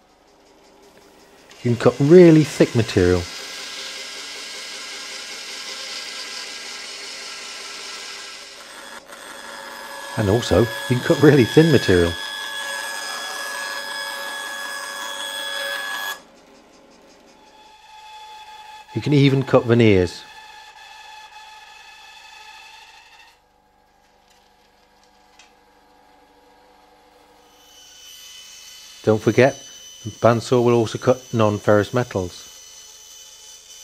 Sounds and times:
Speech: 1.6 - 3.3, 10.2 - 12.2, 18.9 - 20.3, 29.0 - 32.5
Tools: 5.0 - 18.4.

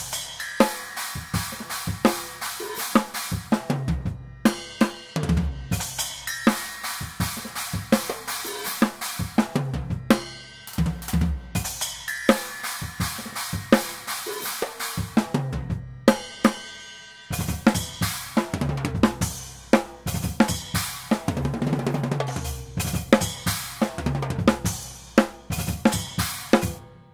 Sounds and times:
Drum roll: 0.0 - 16.6, 17.3 - 26.8
Drum kit: 0.0 - 27.1
Bass drum: 17.4 - 26.8.

